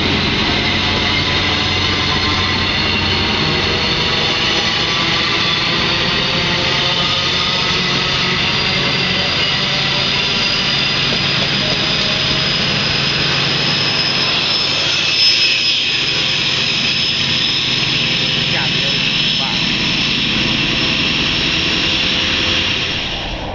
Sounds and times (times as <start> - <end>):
Outside, rural or natural: 0.0 - 23.5
Railroad car, train wagon: 0.0 - 23.5
Train: 0.0 - 23.5
Speech: 18.5 - 19.7.